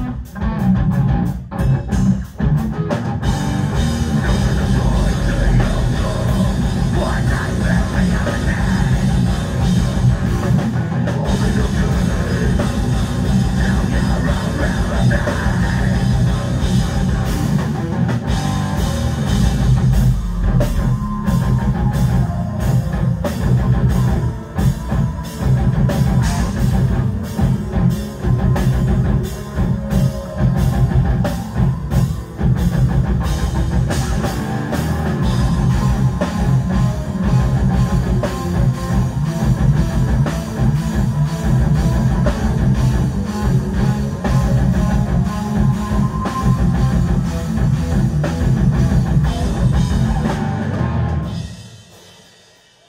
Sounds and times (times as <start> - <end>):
Heavy metal: 0.0 - 52.8.